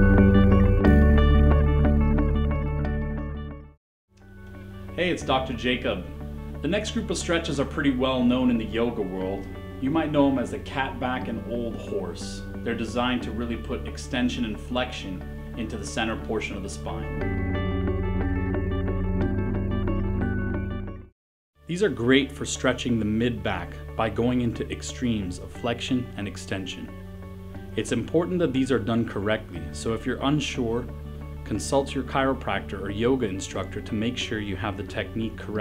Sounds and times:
Music: 0:00.0 - 0:35.6
Speech: 0:05.0 - 0:17.2, 0:21.7 - 0:26.9, 0:27.8 - 0:30.9, 0:31.5 - 0:35.6.

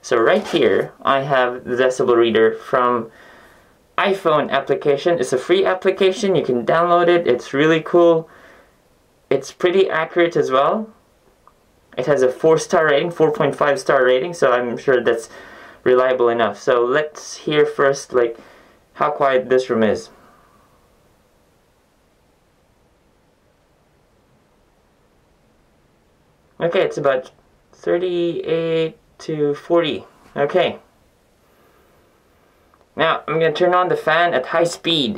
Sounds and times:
Speech: 0:00.0 - 0:03.2, 0:04.0 - 0:08.3, 0:09.3 - 0:11.0, 0:12.0 - 0:18.4, 0:19.0 - 0:20.2, 0:26.6 - 0:30.9, 0:33.0 - 0:35.1.

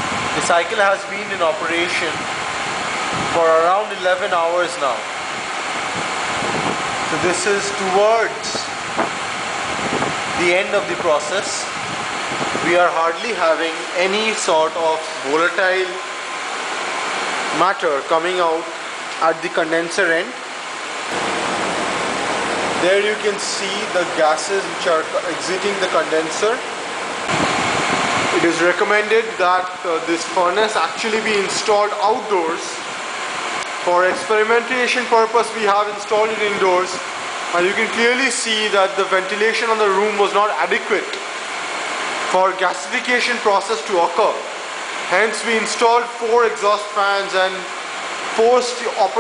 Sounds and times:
Speech: 0:00.4 - 0:02.2, 0:03.4 - 0:05.1, 0:07.1 - 0:08.8, 0:10.4 - 0:11.8, 0:12.6 - 0:16.1, 0:17.5 - 0:20.4, 0:22.8 - 0:26.7, 0:28.3 - 0:32.9, 0:33.8 - 0:41.2, 0:42.3 - 0:47.7, 0:48.4 - 0:49.2.

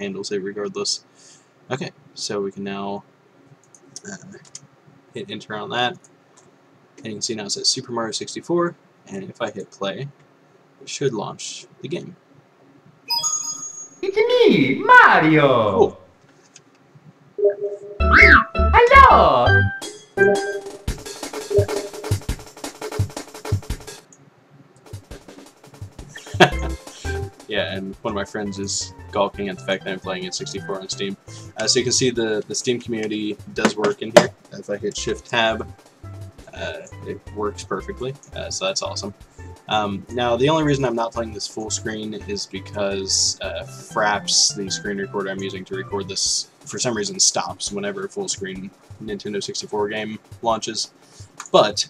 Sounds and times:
Drum machine: 0:18.0 - 0:24.0, 0:24.9 - 0:28.0, 0:33.0 - 0:37.0, 0:49.8 - 0:50.6.

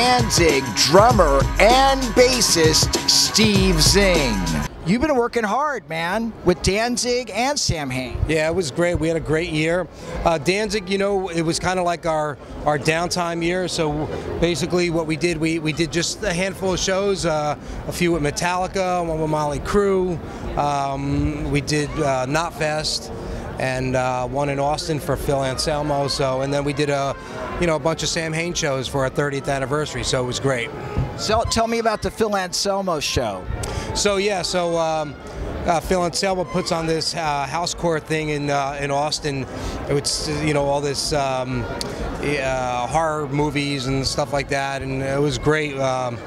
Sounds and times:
Speech: 0:00.0 - 0:23.0.

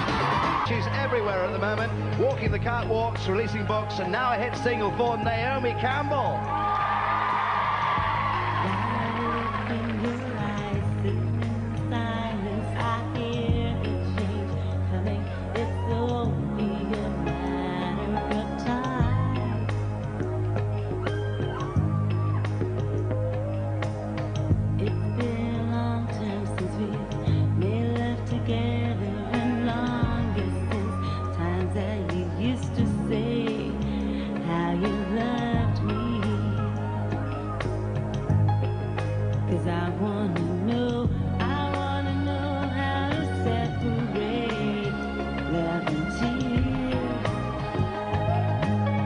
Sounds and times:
Music: 0:00.0 - 0:49.0
Singing: 0:07.2 - 0:19.9, 0:24.8 - 0:37.7, 0:39.5 - 0:49.0.

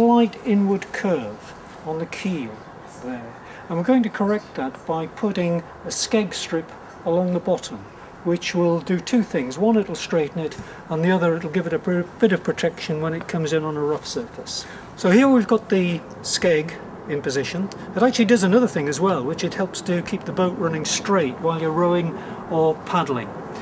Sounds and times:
Speech: 0:00.0 - 0:23.3.

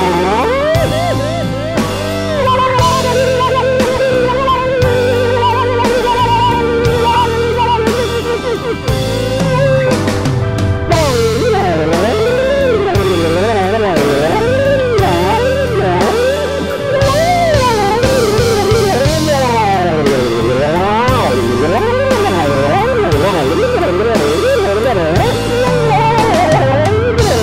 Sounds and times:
Musical instrument: 0:00.0 - 0:27.4.

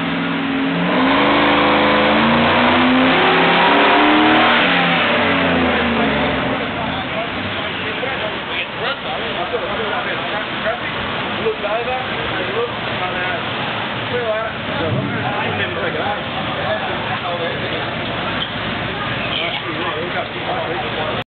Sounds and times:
Speech: 0:05.7 - 0:21.2.

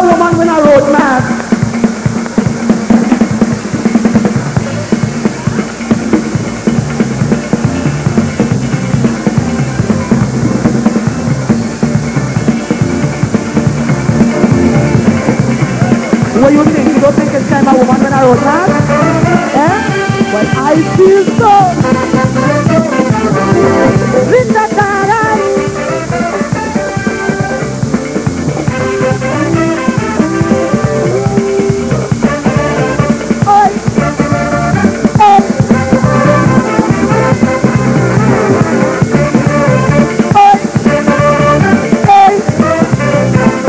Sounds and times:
Music: 0:00.0 - 0:43.6.

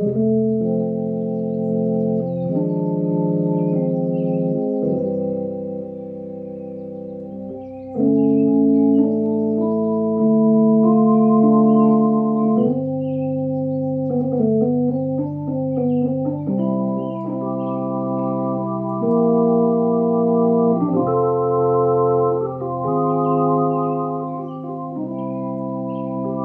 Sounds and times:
Hammond organ: 0:00.0 - 0:26.4.

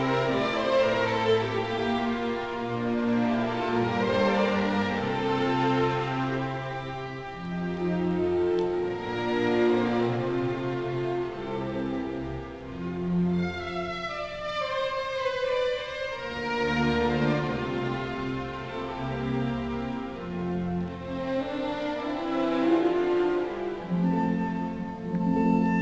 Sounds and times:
Violin, fiddle: 0:00.0 - 0:25.8.

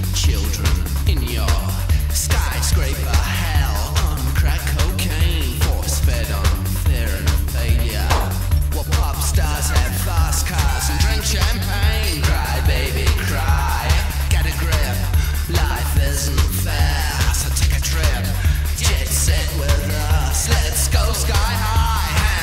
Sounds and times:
Music: 0:00.0 - 0:22.4.

